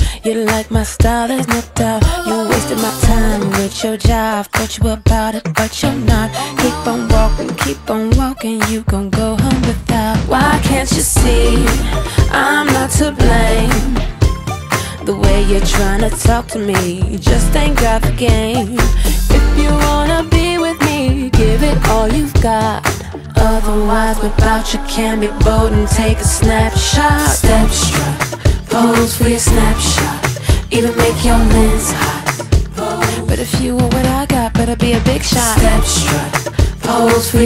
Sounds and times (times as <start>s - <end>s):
Music: 0.0s - 37.4s.